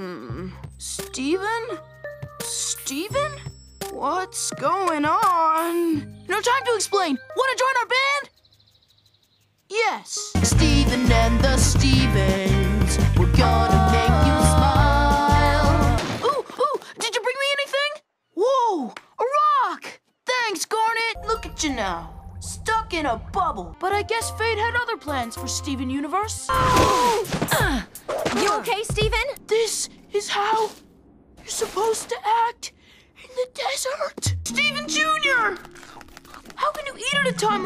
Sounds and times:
Music: 0.0 - 8.4, 10.1 - 16.0, 21.2 - 31.6, 34.2 - 37.6
Speech: 0.8 - 1.8, 4.0 - 8.3, 9.7 - 10.4, 16.6 - 27.1, 28.4 - 30.8, 33.2 - 35.6, 36.6 - 37.6.

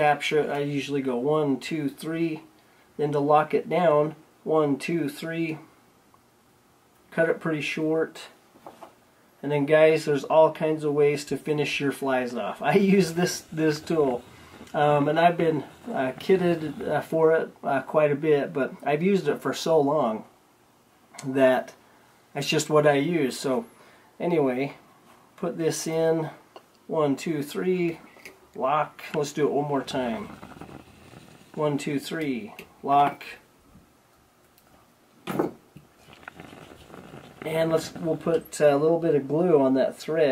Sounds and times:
Speech: 0.0 - 5.7, 7.1 - 8.4, 9.4 - 20.3, 21.2 - 21.8, 22.4 - 24.8, 25.4 - 28.0, 28.6 - 30.4, 31.6 - 33.5, 37.4 - 40.3
Inside, small room: 0.0 - 40.3.

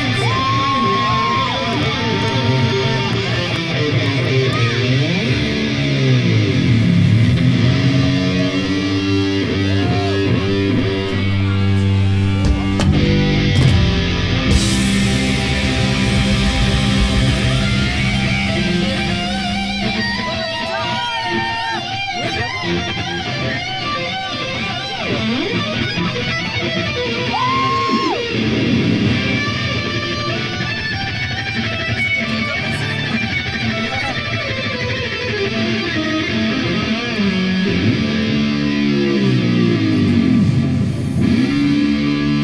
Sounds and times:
Music: 0.0 - 42.4.

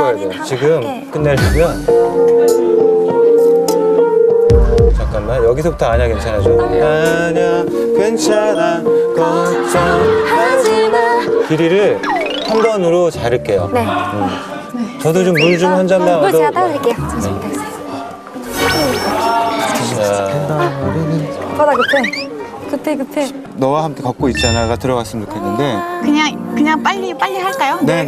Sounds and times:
Music: 0.0 - 28.0
Singing: 6.5 - 12.0, 25.2 - 26.6.

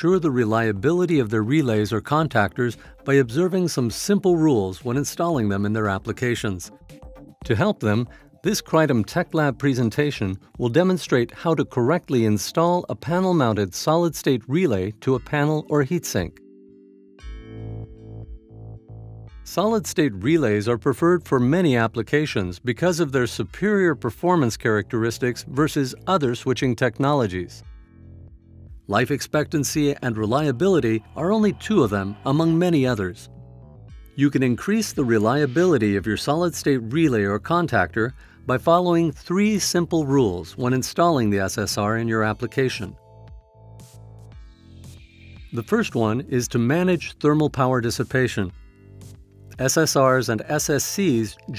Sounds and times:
Speech: 0.0 - 6.7, 7.5 - 16.4, 19.5 - 27.6, 28.9 - 33.3, 34.2 - 43.0, 45.6 - 48.6, 49.6 - 51.5
Music: 0.0 - 51.5.

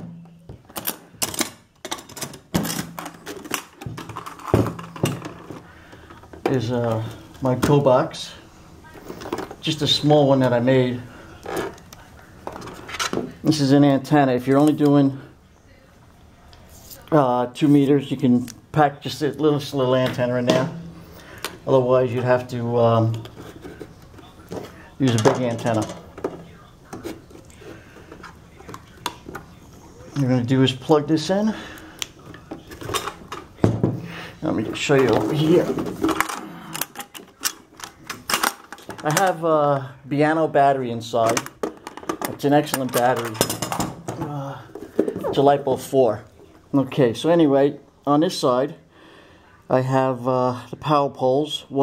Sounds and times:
Speech: 6.5 - 11.1, 13.4 - 20.8, 21.7 - 23.5, 24.2 - 27.7, 28.6 - 31.7, 34.4 - 35.9, 39.0 - 41.5, 42.3 - 43.5, 44.2 - 48.8, 49.7 - 51.8.

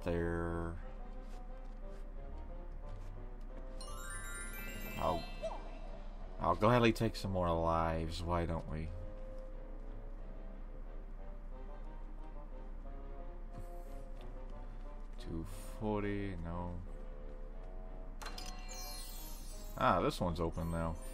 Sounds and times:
Speech: 0.0 - 0.8, 5.0 - 5.2, 6.4 - 9.0, 15.2 - 16.9, 19.8 - 21.0
Music: 0.0 - 21.1.

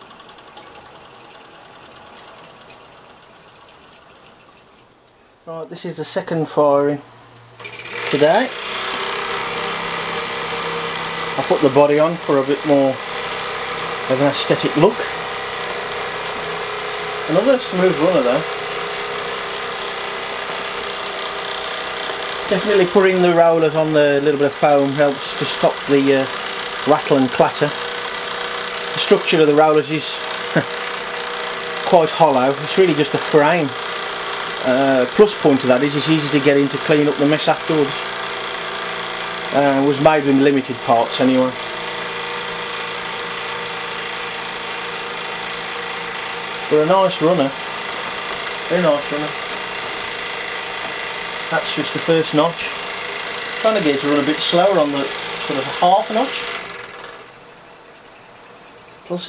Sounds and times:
Engine: 0.0 - 4.9, 7.6 - 59.2
Speech: 5.5 - 7.1, 8.1 - 8.6, 11.4 - 13.0, 14.1 - 15.1, 17.3 - 18.5, 22.5 - 26.3, 26.9 - 27.8, 29.0 - 30.2, 31.9 - 33.8, 34.6 - 38.0, 39.5 - 41.6, 46.7 - 47.6, 48.7 - 49.4, 51.5 - 52.8, 53.6 - 56.5, 59.1 - 59.2.

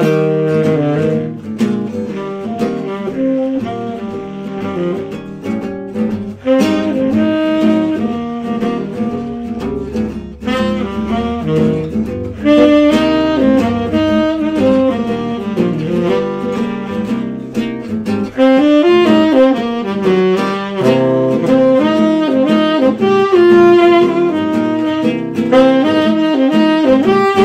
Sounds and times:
Acoustic guitar: 0.0 - 27.4
Strum: 0.0 - 27.4.

